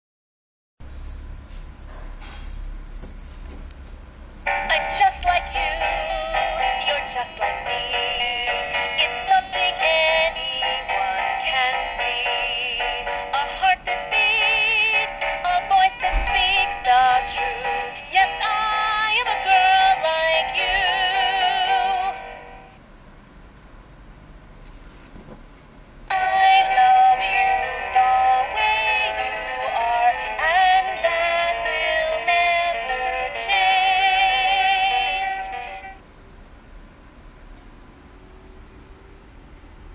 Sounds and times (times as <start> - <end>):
Music: 4.5 - 22.8, 26.1 - 36.0.